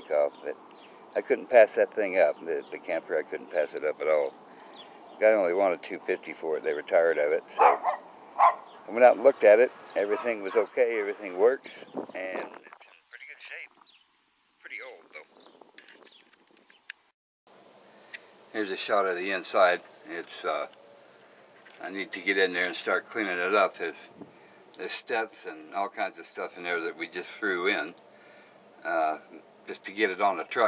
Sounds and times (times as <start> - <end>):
Speech: 0.0 - 0.6, 1.2 - 4.3, 5.2 - 7.6, 8.9 - 13.7, 14.6 - 15.3, 18.5 - 20.7, 21.8 - 24.1, 24.8 - 28.0, 28.8 - 30.6
Outside, rural or natural: 0.0 - 30.6.